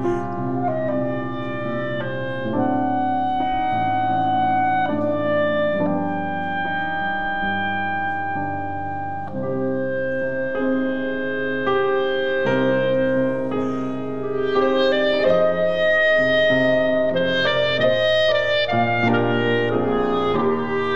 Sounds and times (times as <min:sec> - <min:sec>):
Clarinet: 0:00.0 - 0:20.9.